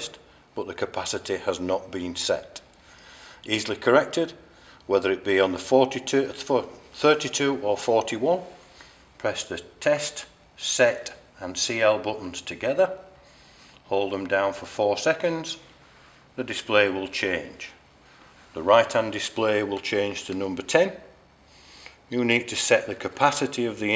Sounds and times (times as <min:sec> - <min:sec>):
Speech: 0:00.0 - 0:02.7, 0:03.5 - 0:08.6, 0:09.2 - 0:13.1, 0:13.8 - 0:15.6, 0:16.4 - 0:17.8, 0:18.5 - 0:21.2, 0:22.1 - 0:23.9.